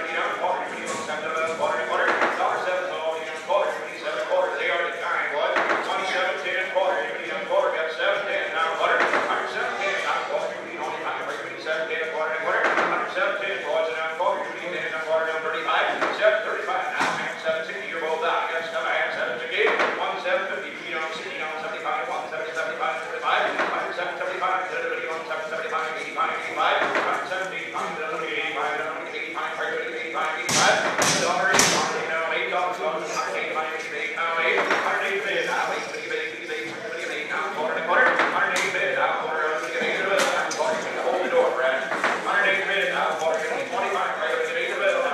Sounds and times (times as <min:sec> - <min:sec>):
Speech: 0:00.0 - 0:45.1.